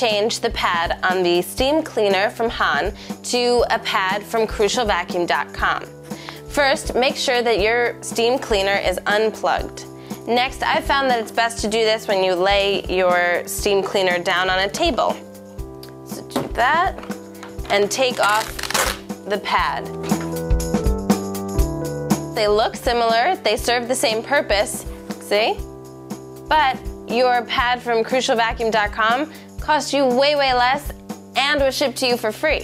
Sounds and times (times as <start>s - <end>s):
Speech: 0.0s - 5.9s, 6.5s - 15.2s, 16.1s - 17.0s, 17.7s - 18.5s, 19.3s - 19.9s, 22.4s - 25.6s, 26.5s - 32.6s
Music: 0.0s - 32.6s.